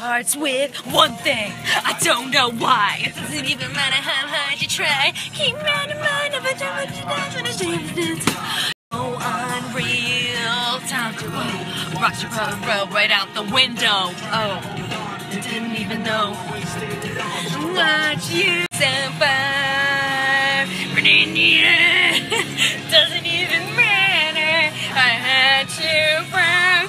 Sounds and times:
Female singing: 0:00.0 - 0:26.8
Male singing: 0:00.0 - 0:26.8
Music: 0:00.0 - 0:26.8
Rapping: 0:00.0 - 0:26.8.

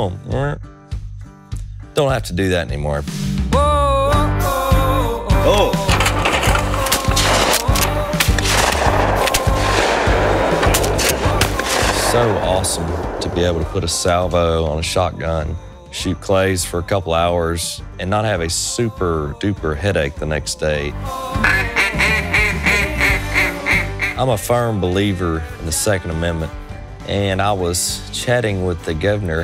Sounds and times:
Speech: 0:00.0 - 0:00.6, 0:02.0 - 0:03.1, 0:12.0 - 0:21.0, 0:24.2 - 0:29.4
Music: 0:00.0 - 0:29.4.

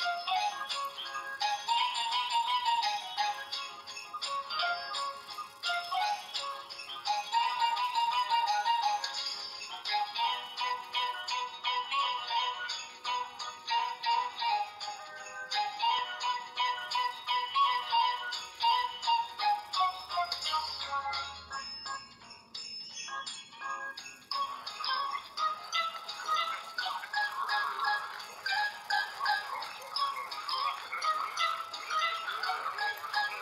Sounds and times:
Music: 0:00.0 - 0:33.4.

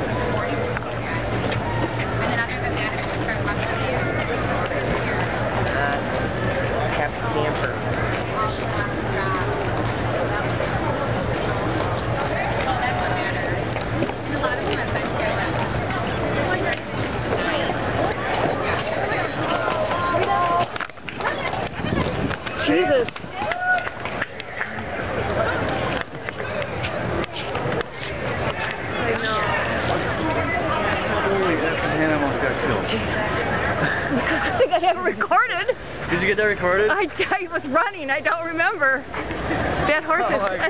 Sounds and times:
Clip-clop: 0:07.8 - 0:31.1.

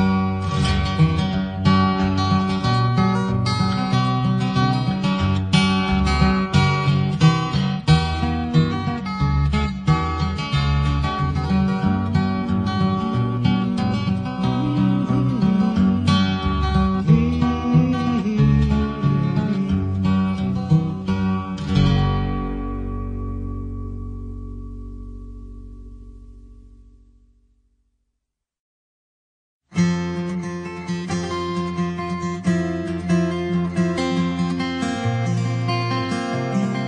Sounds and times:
Music: 0:00.0 - 0:28.0, 0:29.7 - 0:36.8.

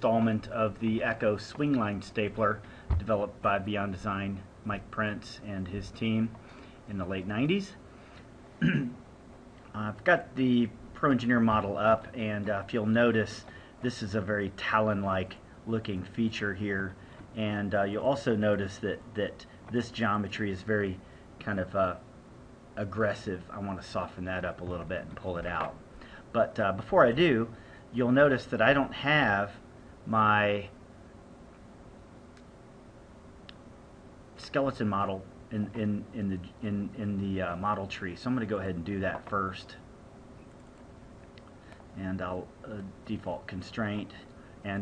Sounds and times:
Speech: 0:00.0 - 0:07.8, 0:09.7 - 0:22.0, 0:22.8 - 0:30.8, 0:34.4 - 0:39.9, 0:41.9 - 0:44.8.

